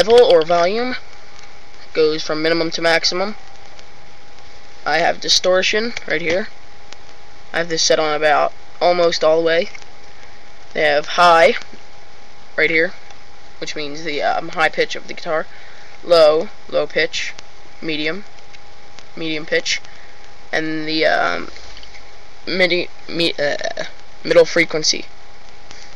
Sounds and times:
Speech: 0.0s - 1.0s, 1.9s - 3.4s, 4.9s - 6.5s, 7.6s - 9.8s, 10.8s - 11.7s, 12.6s - 13.0s, 13.6s - 18.2s, 19.2s - 19.8s, 20.6s - 21.6s, 22.5s - 25.1s.

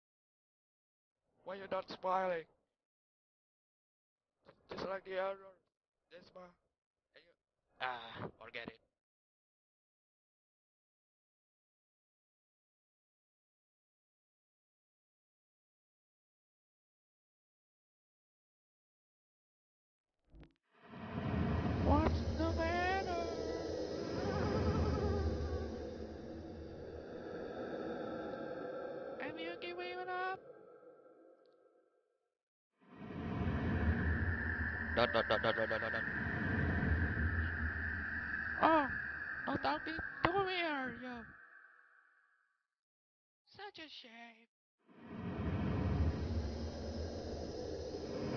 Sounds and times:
Speech: 1.4s - 2.6s, 4.7s - 6.6s, 7.2s - 8.8s, 21.9s - 23.6s, 29.2s - 30.4s, 35.0s - 36.0s, 38.6s - 41.3s, 43.5s - 44.5s.

